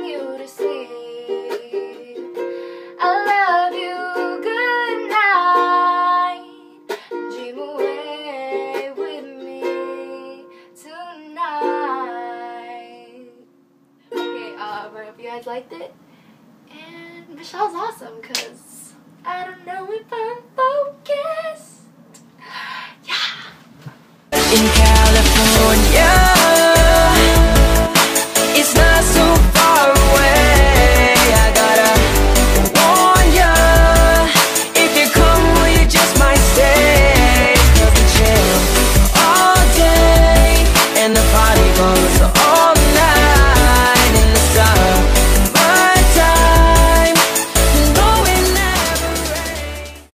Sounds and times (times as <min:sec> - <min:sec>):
Singing: 0:24.4 - 0:32.2, 0:32.8 - 0:45.0, 0:45.6 - 0:50.1
Musical instrument: 0:24.4 - 0:50.1.